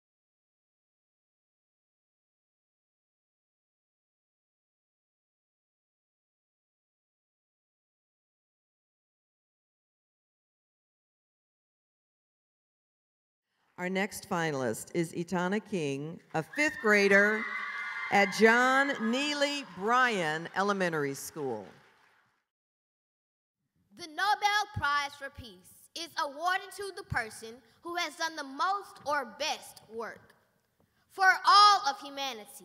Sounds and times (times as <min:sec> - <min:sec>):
Narration, monologue: 0:13.6 - 0:21.9, 0:23.9 - 0:32.6
Child speech, kid speaking: 0:24.0 - 0:30.4, 0:31.1 - 0:32.6.